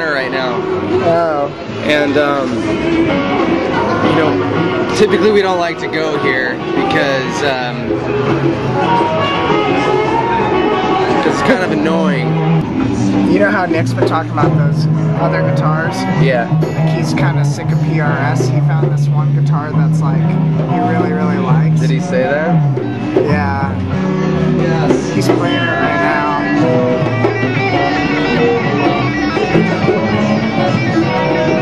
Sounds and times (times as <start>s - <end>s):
Strum: 0.0s - 31.6s
Speech: 13.3s - 22.6s, 23.2s - 23.8s, 24.7s - 26.4s.